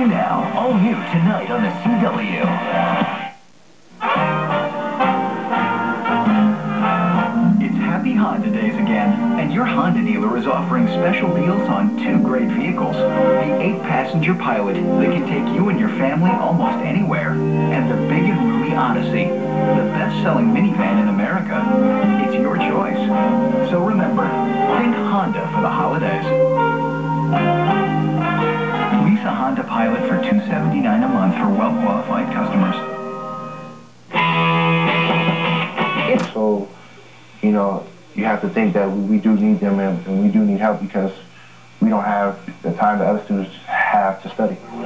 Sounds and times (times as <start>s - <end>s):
Speech: 0.0s - 3.1s, 7.6s - 26.3s, 28.9s - 32.9s, 36.0s - 36.8s, 37.4s - 44.8s
Music: 0.0s - 44.8s
Television: 0.0s - 44.8s.